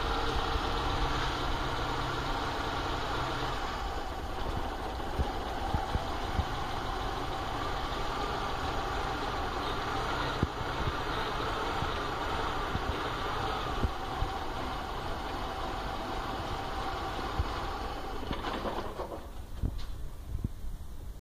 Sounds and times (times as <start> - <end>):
Vehicle: 0.0 - 21.2.